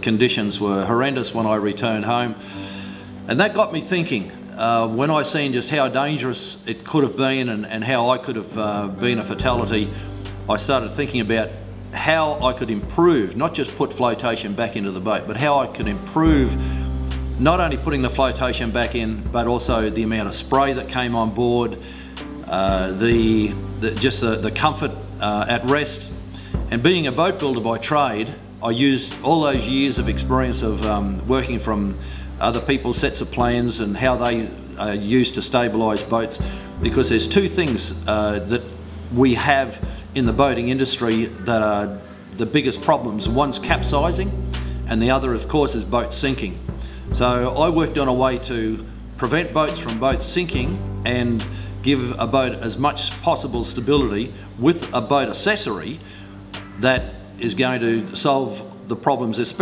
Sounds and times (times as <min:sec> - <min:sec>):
Speech: 0:00.0 - 0:02.4, 0:03.3 - 0:16.6, 0:17.4 - 0:21.8, 0:22.4 - 0:56.0, 0:56.8 - 0:59.6
Music: 0:00.0 - 0:59.6.